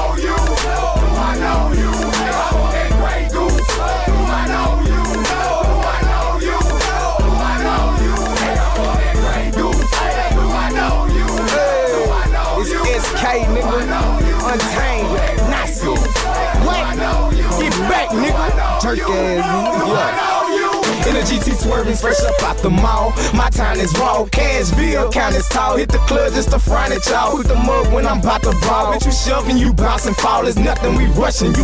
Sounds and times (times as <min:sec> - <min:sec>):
Music: 0:00.0 - 0:31.6.